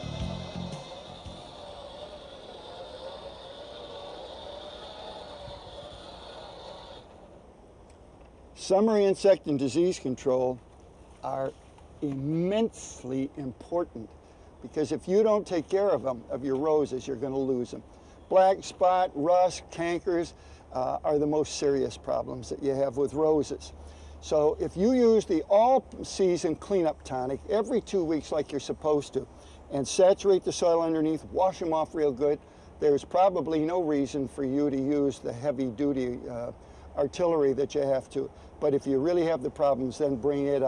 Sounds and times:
Speech: 0:08.6 - 0:10.6, 0:11.2 - 0:40.6.

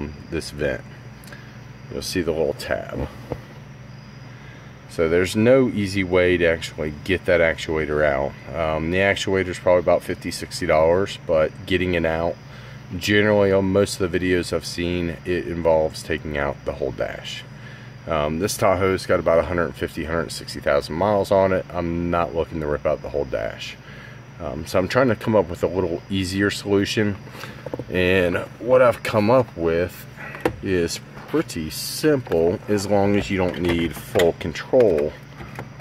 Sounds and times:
Speech: 0:00.0 - 0:00.9, 0:01.9 - 0:03.2, 0:04.9 - 0:23.8, 0:24.4 - 0:27.2, 0:27.8 - 0:35.3.

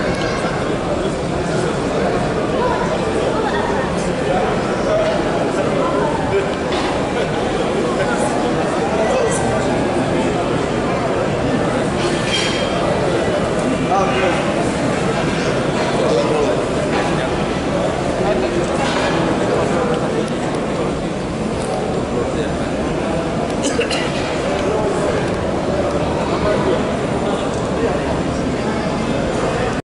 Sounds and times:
Speech: 0:00.0 - 0:29.8.

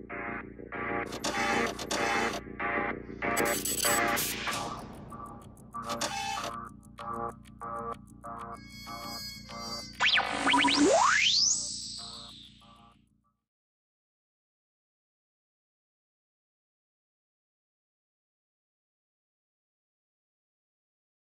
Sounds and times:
Music: 0:00.0 - 0:13.5.

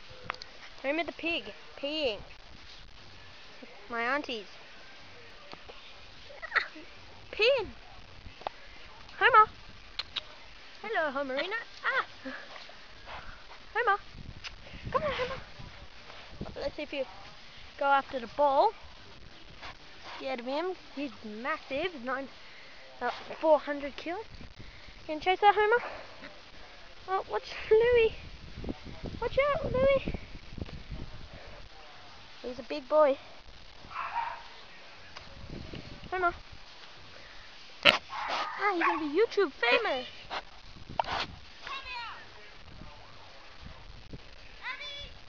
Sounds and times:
Oink: 0:37.8 - 0:38.5.

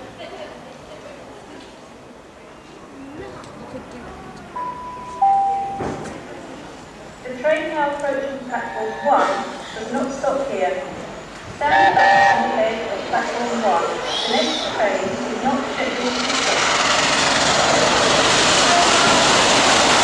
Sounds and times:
Railroad car, train wagon: 0:00.0 - 0:20.0
Train whistle: 0:08.6 - 0:09.5, 0:11.7 - 0:12.6.

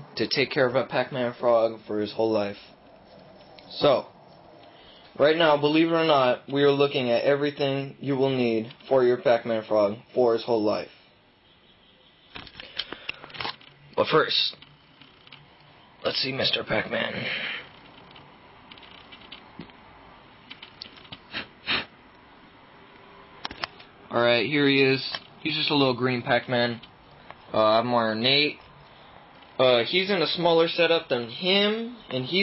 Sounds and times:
Speech: 0:00.2 - 0:02.7, 0:03.7 - 0:04.1, 0:05.2 - 0:11.0, 0:14.0 - 0:14.6, 0:16.0 - 0:17.3, 0:24.1 - 0:26.8, 0:29.6 - 0:32.4.

